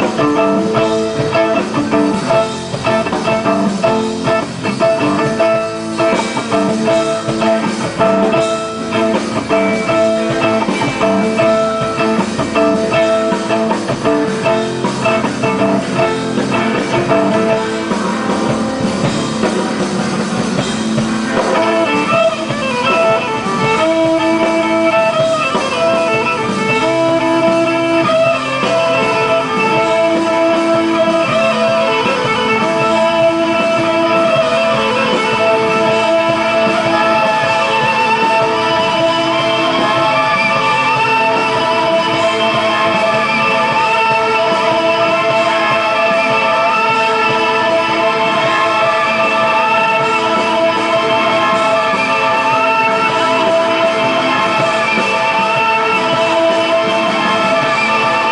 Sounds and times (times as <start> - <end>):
Music: 0.0 - 58.3.